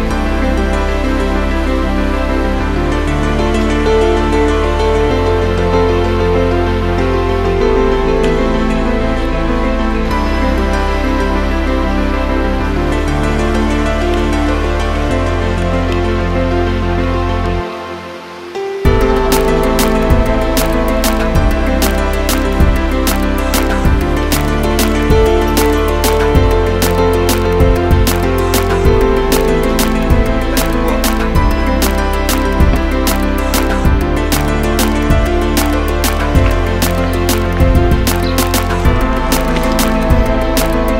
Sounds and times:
Background music: 0.0 - 40.9.

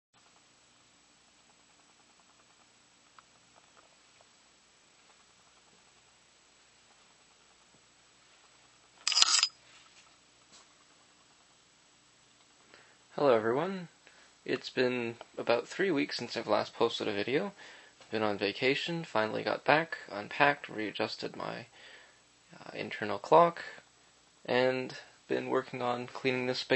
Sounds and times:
Inside, small room: 0.2 - 26.7.

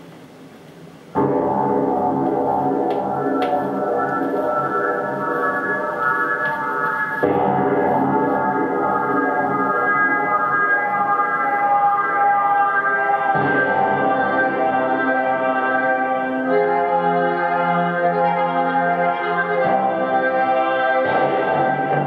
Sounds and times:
Music: 0.0 - 22.0.

